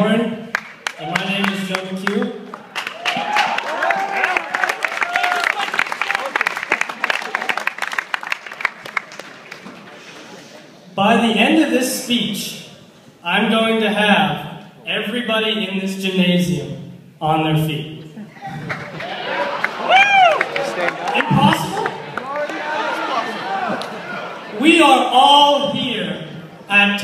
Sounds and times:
Male speech, man speaking: 0.0 - 0.4, 1.0 - 2.4, 11.0 - 18.0, 20.7 - 23.3, 24.6 - 27.0.

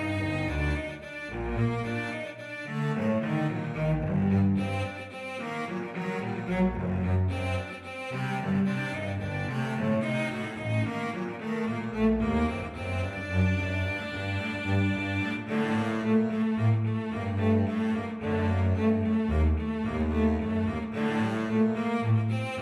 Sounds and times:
Cello: 0.0 - 22.6.

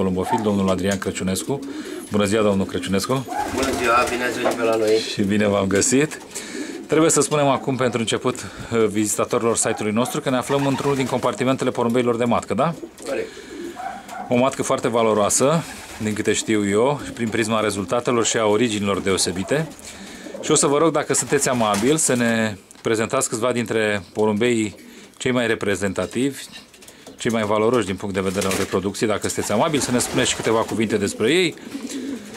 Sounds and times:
Speech: 0.0 - 6.2, 6.9 - 13.3, 14.3 - 19.8, 20.4 - 26.6, 27.2 - 31.6
Inside, small room: 0.0 - 32.3
Pigeon, dove: 3.0 - 5.1, 12.9 - 14.4, 29.4 - 32.3.

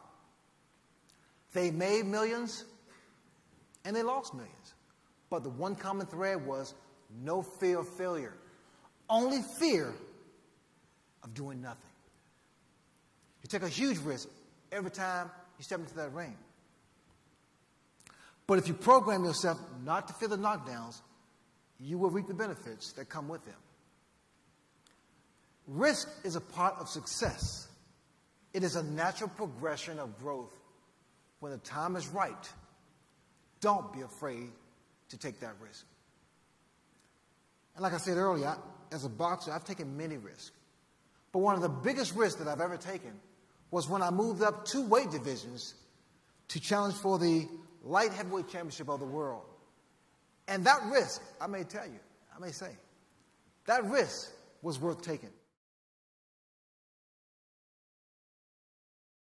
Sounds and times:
Narration, monologue: 0.0 - 55.6
Male speech, man speaking: 1.5 - 2.8, 3.8 - 8.4, 9.1 - 10.1, 11.2 - 12.0, 13.4 - 16.5, 18.5 - 21.1, 21.8 - 23.6, 25.7 - 27.7, 28.6 - 30.6, 31.4 - 32.6, 33.6 - 35.9, 37.8 - 40.6, 41.4 - 43.2, 43.8 - 45.8, 46.5 - 49.6, 50.5 - 52.9, 53.7 - 55.4.

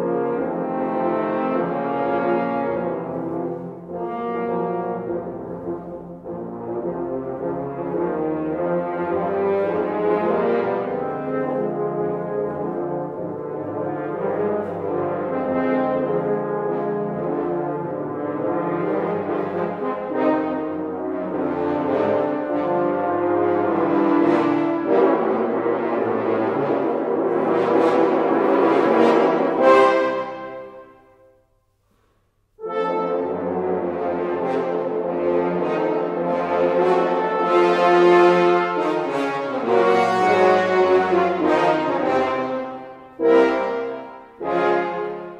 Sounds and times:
French horn: 0.0 - 45.3.

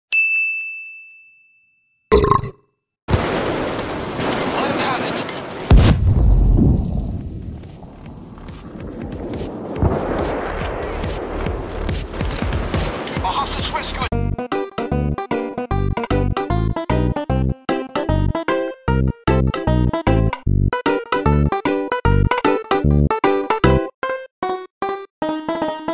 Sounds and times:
Ding: 0.1 - 2.1, 5.7 - 9.2.

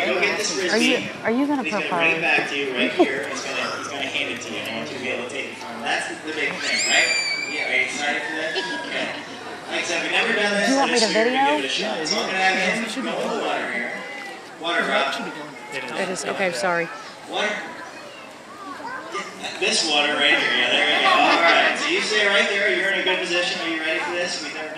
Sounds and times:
Speech: 9.8 - 13.7.

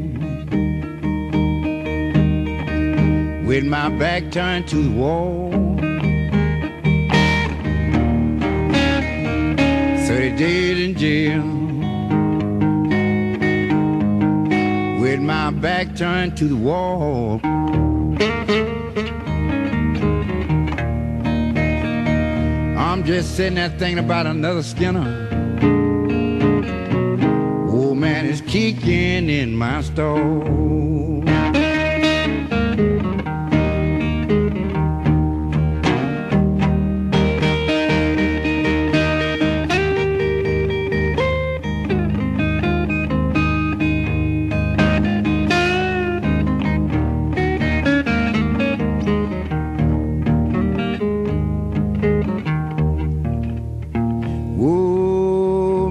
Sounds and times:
Guitar: 0.0 - 55.9.

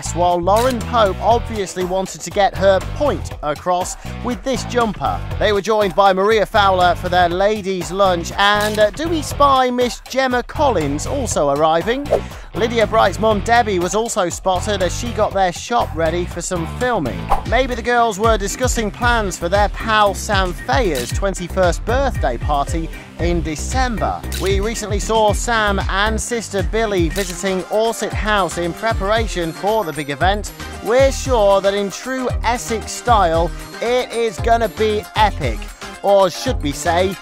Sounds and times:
Music: 0.0 - 37.2
Speech: 0.0 - 37.2.

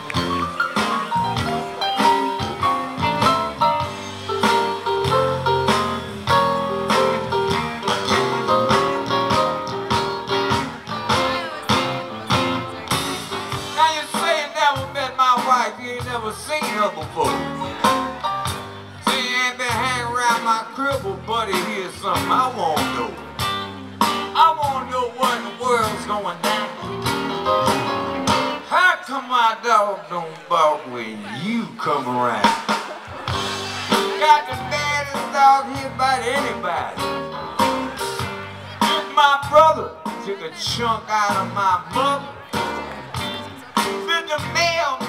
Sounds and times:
Music: 0.0 - 45.0.

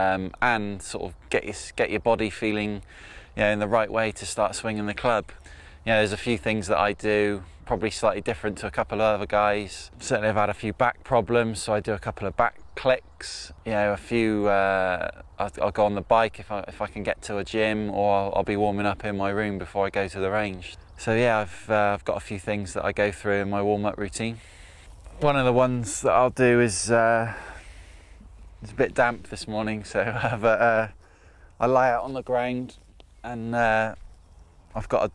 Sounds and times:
Speech: 0.0 - 24.4, 25.2 - 27.6, 28.6 - 31.0, 31.6 - 34.0, 34.8 - 35.1.

